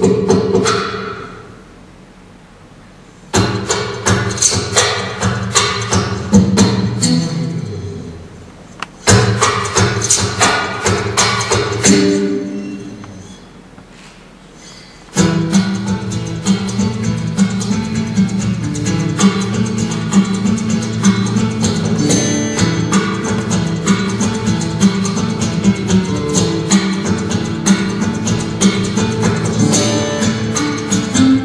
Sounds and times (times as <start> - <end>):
Acoustic guitar: 0.0 - 1.6, 3.2 - 8.4, 9.0 - 31.4.